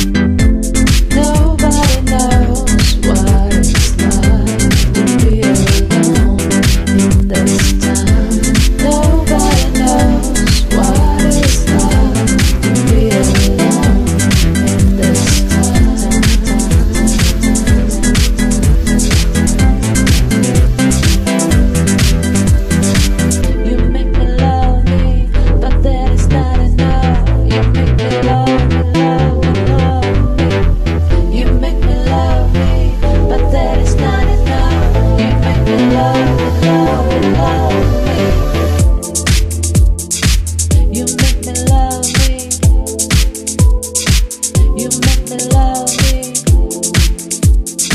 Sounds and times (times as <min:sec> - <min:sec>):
Sampler: 0:00.0 - 0:25.8.